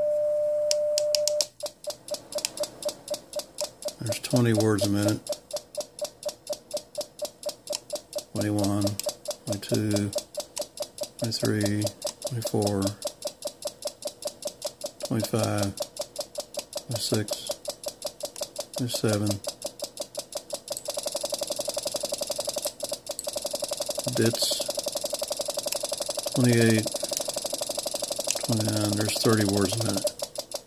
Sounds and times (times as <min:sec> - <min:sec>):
Speech: 0:04.0 - 0:05.2, 0:08.4 - 0:10.1, 0:11.2 - 0:13.0, 0:15.1 - 0:15.8, 0:16.9 - 0:17.6, 0:18.8 - 0:19.4, 0:24.1 - 0:24.7, 0:26.4 - 0:26.9, 0:28.5 - 0:30.1.